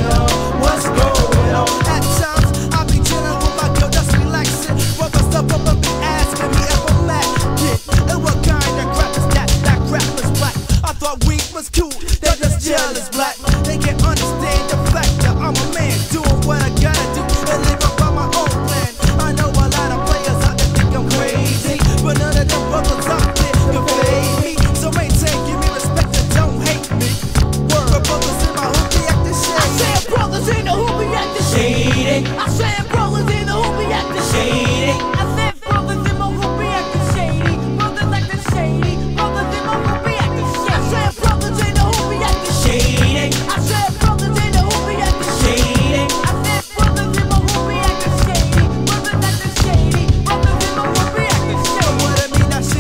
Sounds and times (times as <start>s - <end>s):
Funk: 0.0s - 52.8s
Rapping: 0.0s - 52.8s.